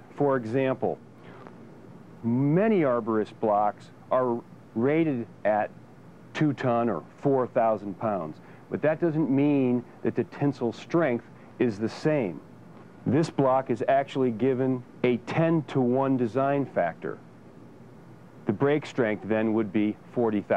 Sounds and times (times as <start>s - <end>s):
Speech: 0.1s - 1.0s, 2.2s - 5.8s, 6.4s - 12.4s, 13.1s - 17.2s, 18.5s - 20.5s.